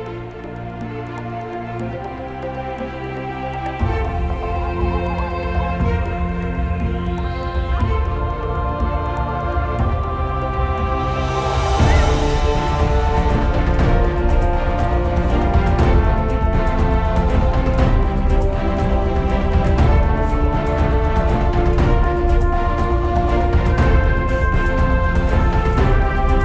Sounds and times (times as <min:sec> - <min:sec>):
Music: 0:00.0 - 0:26.4.